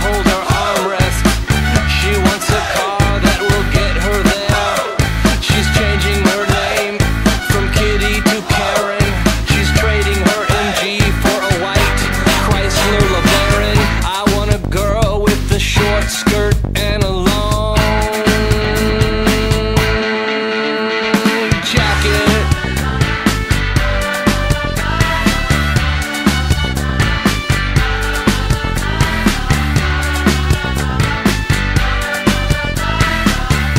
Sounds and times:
Grunge: 0.0 - 33.7.

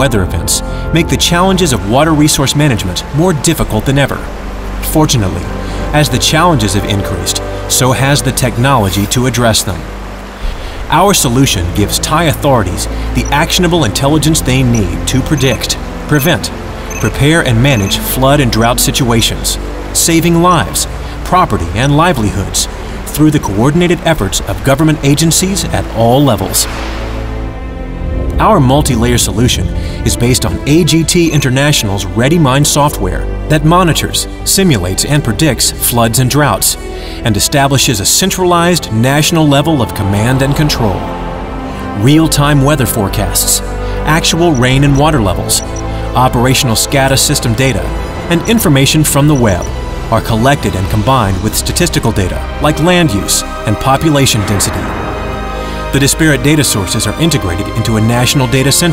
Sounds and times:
Speech: 0.0 - 9.9, 10.9 - 26.7, 28.3 - 41.1, 42.0 - 55.0, 55.9 - 58.9
Music: 0.0 - 58.9.

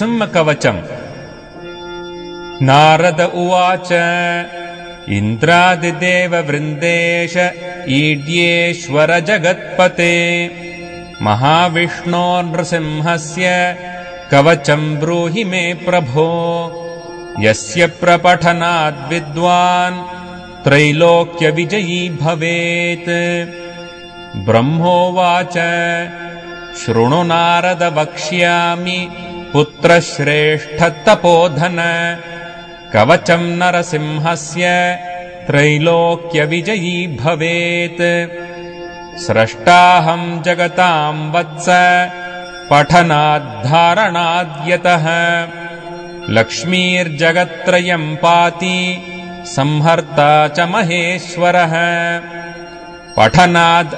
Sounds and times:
Mantra: 2.6 - 10.5, 11.2 - 16.8, 17.4 - 20.1, 20.7 - 23.5, 24.4 - 38.3, 39.2 - 45.6, 46.3 - 52.3, 53.2 - 53.9.

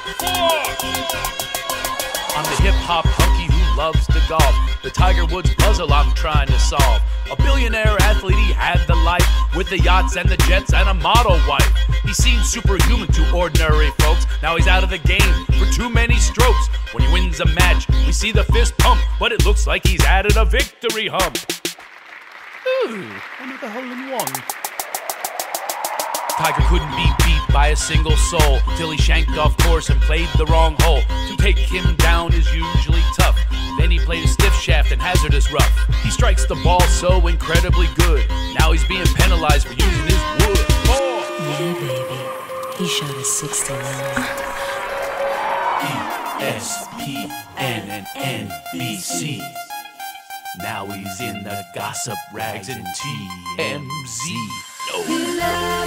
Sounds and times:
Music: 0.0 - 22.6, 23.2 - 55.8
Speech: 22.7 - 24.4, 39.0 - 44.0, 50.6 - 55.1.

